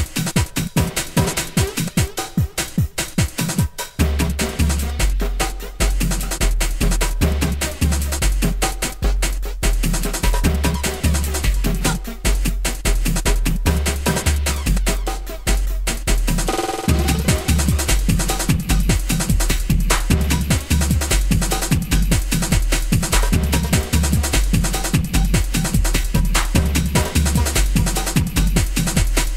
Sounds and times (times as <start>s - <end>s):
Music: 0.0s - 29.3s.